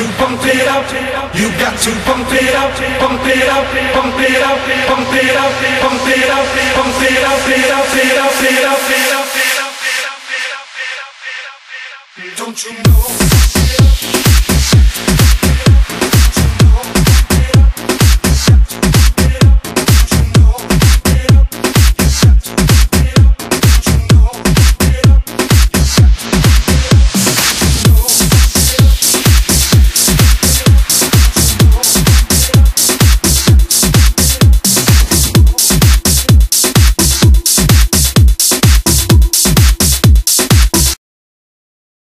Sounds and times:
Music: 0.0 - 41.0.

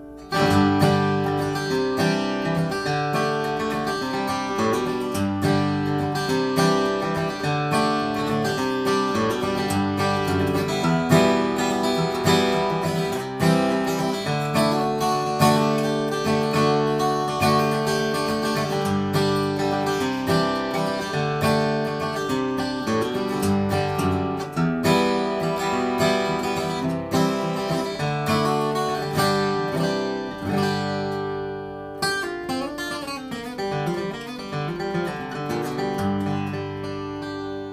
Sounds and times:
Acoustic guitar: 0.0 - 37.7
Strum: 0.0 - 37.7.

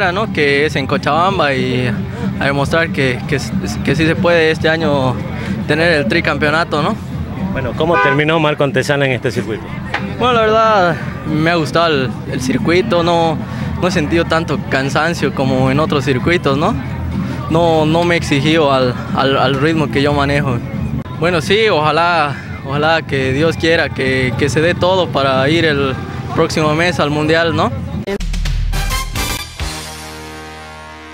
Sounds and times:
Music: 0.0 - 31.1.

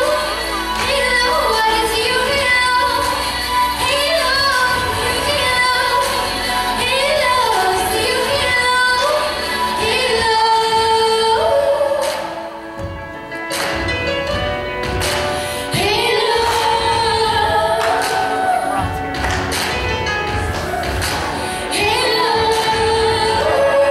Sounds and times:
Singing: 0.0 - 12.7, 15.8 - 23.9
Music: 0.0 - 23.9.

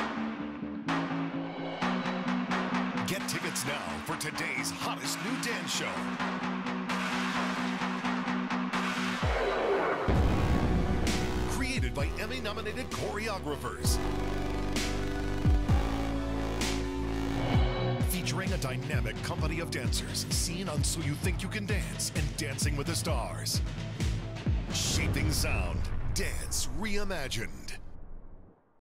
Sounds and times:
Music: 0.0 - 27.1
Speech: 3.1 - 6.0, 11.5 - 14.0, 18.0 - 23.6, 24.8 - 27.8
Sound effect: 8.8 - 18.2, 24.8 - 28.8.

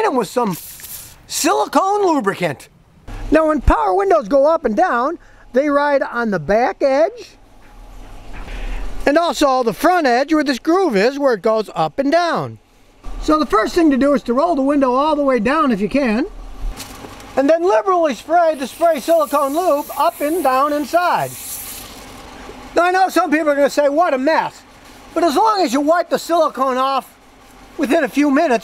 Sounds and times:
Speech: 0.0 - 0.6, 1.3 - 2.7, 3.3 - 7.4, 9.0 - 12.6, 13.2 - 16.3, 17.4 - 21.4, 22.8 - 27.1, 27.8 - 28.6.

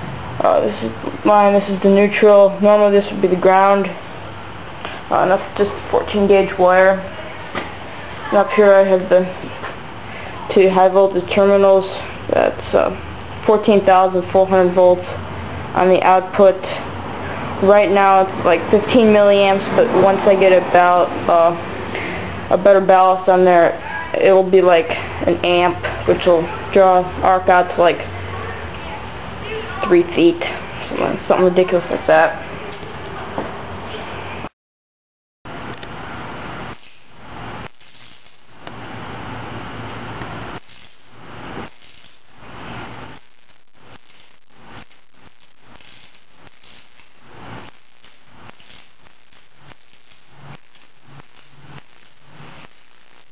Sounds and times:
Speech: 0.4 - 4.0, 5.1 - 7.5, 8.2 - 9.4, 10.4 - 15.2, 15.8 - 16.9, 17.6 - 21.6, 22.5 - 33.3.

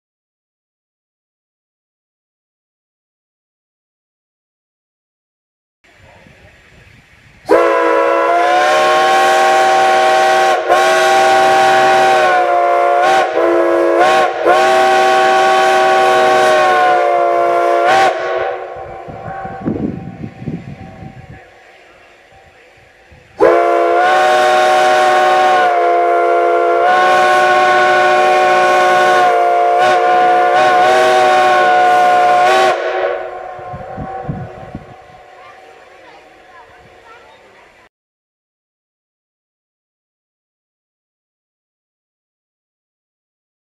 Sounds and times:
Steam whistle: 7.5 - 21.3, 23.4 - 35.2.

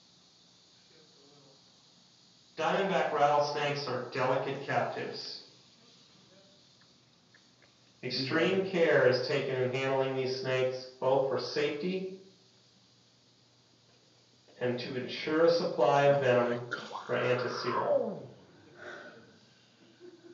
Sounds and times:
Inside, small room: 0.0 - 20.3
Speech: 2.6 - 5.5, 8.0 - 12.2, 14.6 - 18.4.

